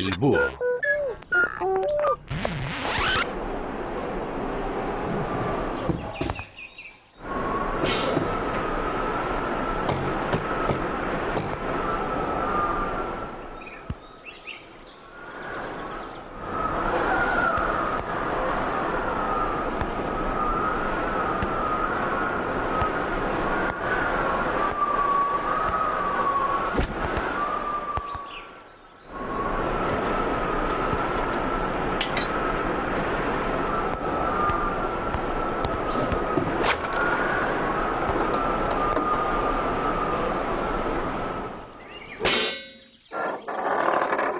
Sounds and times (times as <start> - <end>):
Chirp, tweet: 6.0 - 7.2, 13.6 - 15.0, 28.0 - 29.1, 41.8 - 42.2.